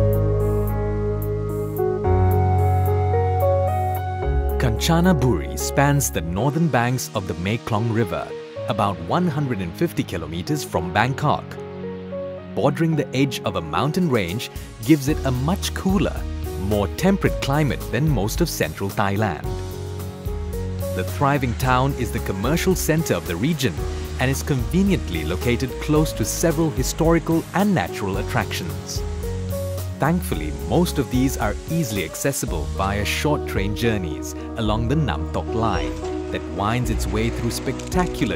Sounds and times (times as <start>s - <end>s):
Music: 0.0s - 38.3s
Speech: 4.6s - 11.6s, 12.6s - 19.5s, 21.0s - 29.0s, 30.0s - 38.3s.